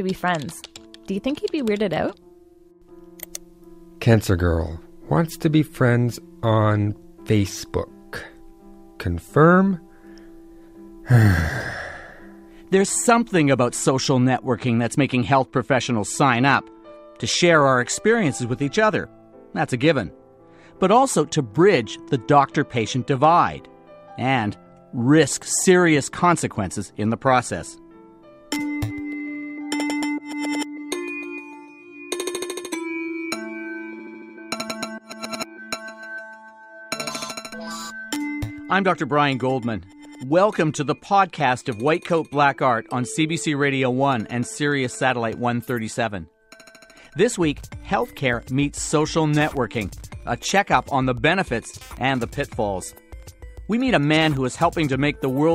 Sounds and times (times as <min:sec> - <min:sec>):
Speech: 0:00.0 - 0:02.2, 0:04.0 - 0:08.3, 0:09.0 - 0:09.8, 0:12.7 - 0:16.6, 0:17.2 - 0:20.1, 0:20.8 - 0:27.8, 0:38.7 - 0:46.3, 0:47.2 - 0:52.9, 0:53.7 - 0:55.5
Music: 0:00.0 - 0:55.5.